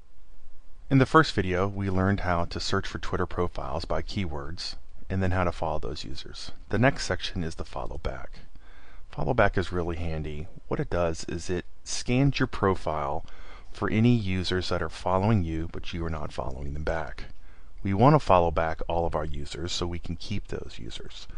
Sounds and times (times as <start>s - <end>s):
Speech: 0.9s - 8.5s, 9.1s - 21.3s.